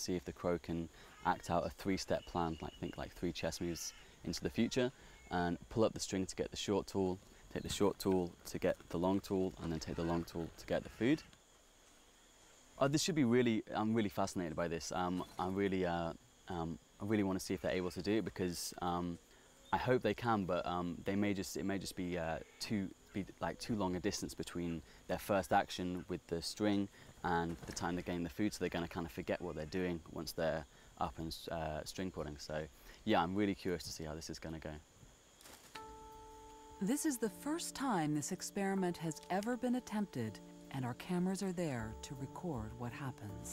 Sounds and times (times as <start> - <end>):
Speech: 0.0 - 11.3, 12.8 - 19.2, 19.8 - 34.8, 36.8 - 43.5.